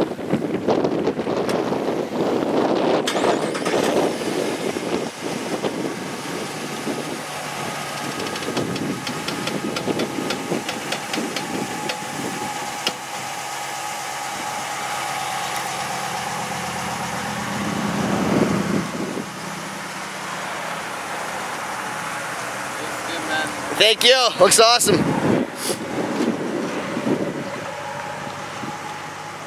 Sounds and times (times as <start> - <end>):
Car: 0.0 - 29.4
Speech: 22.8 - 25.0.